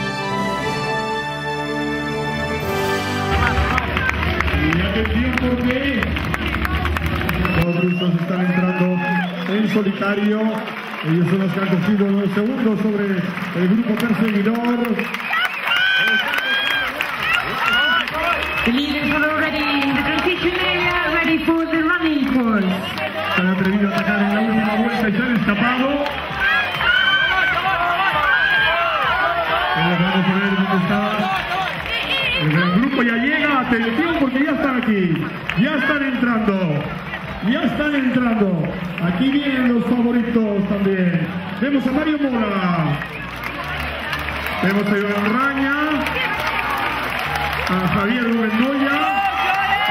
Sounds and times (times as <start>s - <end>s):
Music: 0.0s - 49.9s
Outside, urban or manmade: 0.0s - 49.9s.